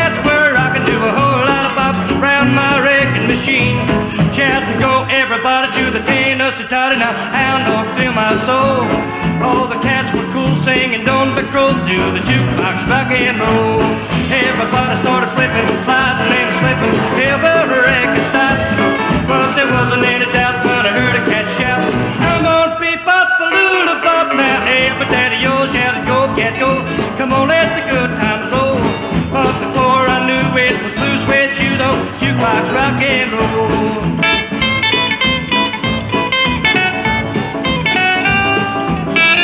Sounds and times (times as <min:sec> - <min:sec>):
Rock and roll: 0:00.0 - 0:39.4.